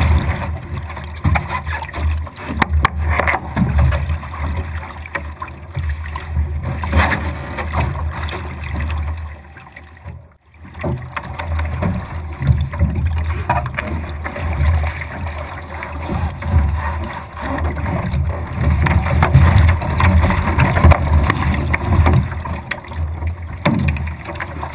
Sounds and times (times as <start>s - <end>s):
Boat, Water vehicle: 0.0s - 24.7s.